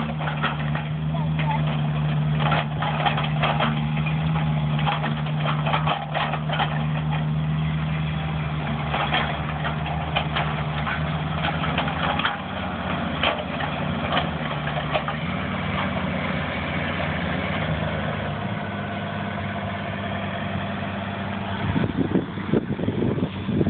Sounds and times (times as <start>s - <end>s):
Truck: 0.0s - 23.7s.